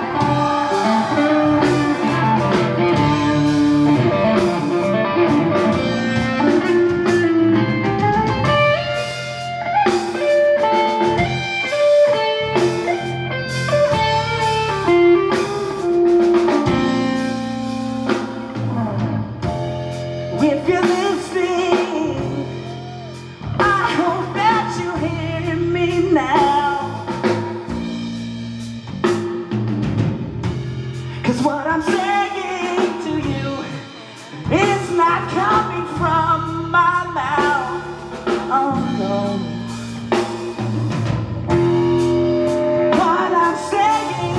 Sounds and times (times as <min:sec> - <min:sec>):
Blues: 0:00.0 - 0:44.3.